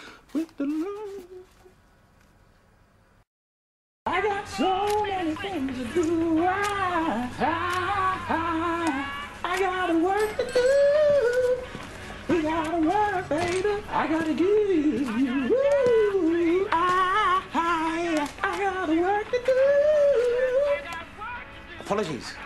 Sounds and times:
Male singing: 4.1 - 22.4
Speech: 21.8 - 22.4.

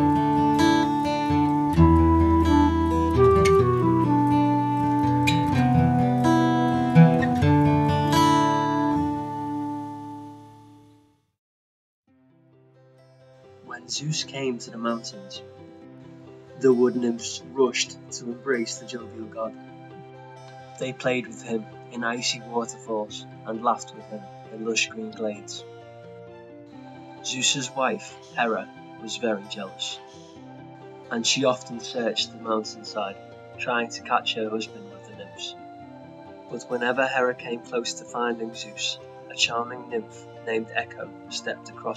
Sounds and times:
Music: 0.0 - 11.4, 12.1 - 41.9
Speech: 13.7 - 15.4, 16.6 - 19.5, 20.8 - 25.6, 27.2 - 30.1, 31.1 - 35.6, 36.5 - 41.9.

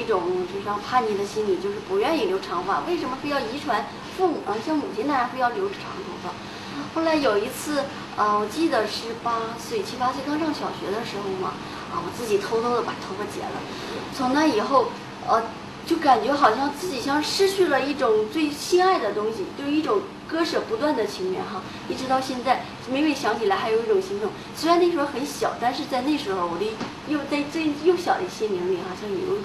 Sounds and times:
Speech: 0.0 - 29.4.

